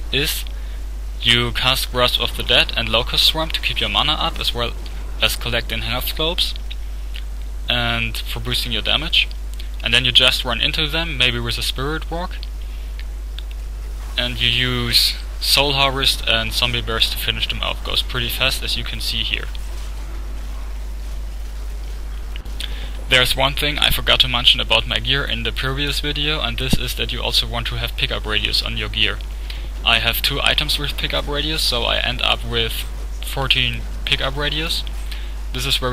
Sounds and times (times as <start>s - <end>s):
Speech: 0.0s - 0.5s, 1.2s - 6.6s, 7.7s - 12.5s, 14.2s - 19.6s, 23.1s - 29.2s, 29.8s - 34.9s, 35.5s - 35.9s.